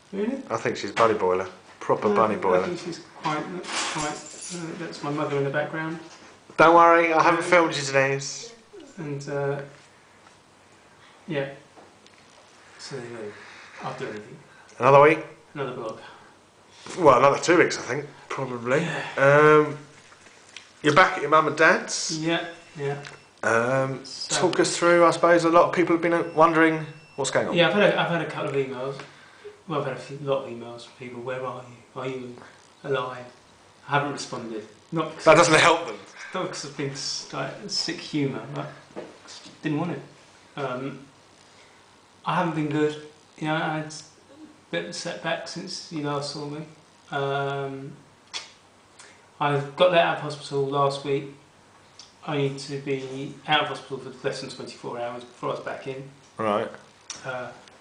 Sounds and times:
Inside, small room: 0.0 - 57.8
Speech: 20.8 - 29.0, 44.7 - 48.0, 49.4 - 51.4, 52.2 - 57.6.

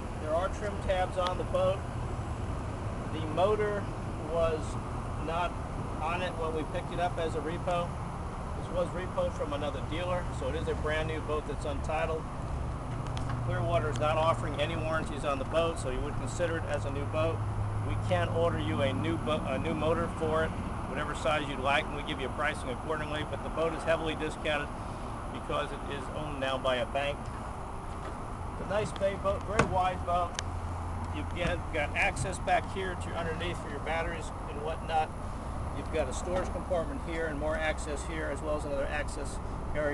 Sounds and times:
Speech: 0.2 - 1.9, 3.1 - 8.0, 8.6 - 12.3, 13.5 - 24.8, 25.4 - 27.2, 28.6 - 30.4, 31.1 - 35.1, 35.8 - 39.9.

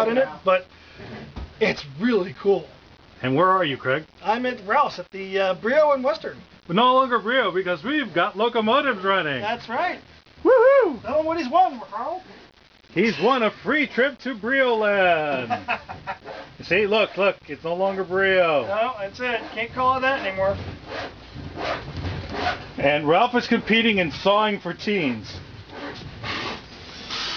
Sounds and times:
Speech: 1.6 - 10.0, 13.0 - 15.5, 16.6 - 20.6, 22.8 - 25.4.

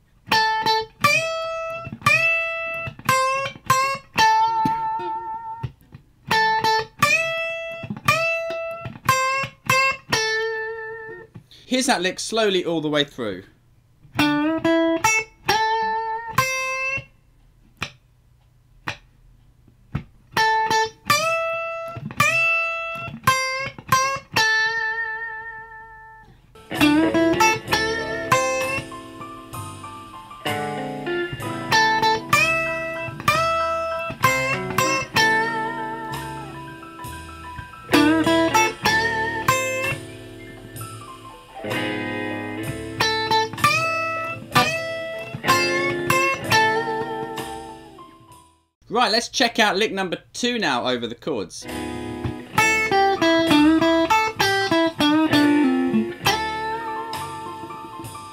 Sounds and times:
Electric guitar: 0.3 - 11.3, 20.4 - 48.4, 51.6 - 58.3.

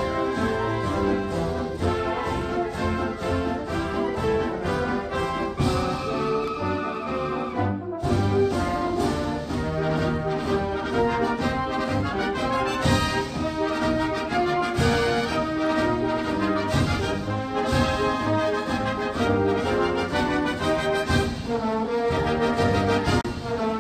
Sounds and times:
Brass instrument: 0.0 - 23.8.

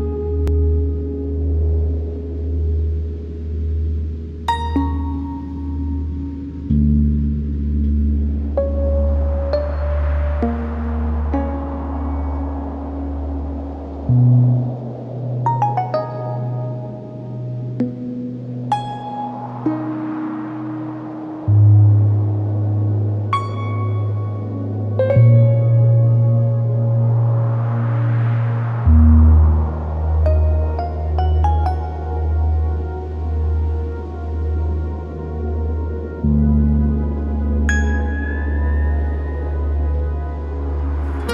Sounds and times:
Ambient music: 0.0 - 41.3.

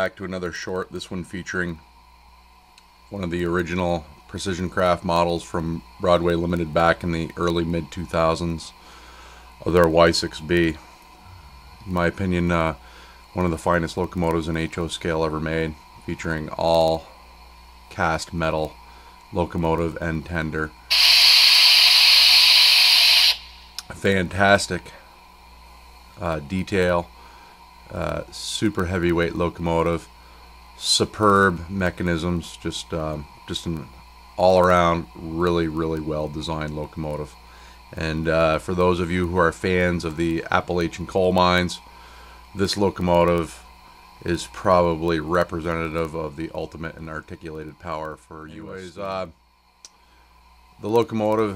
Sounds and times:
Speech: 0.0 - 1.8, 3.1 - 8.8, 9.6 - 10.8, 11.8 - 12.8, 13.4 - 17.1, 17.9 - 20.8, 23.8 - 25.0, 26.2 - 27.1, 27.9 - 30.1, 30.8 - 41.8, 42.6 - 43.6, 44.2 - 49.4, 50.8 - 51.5.

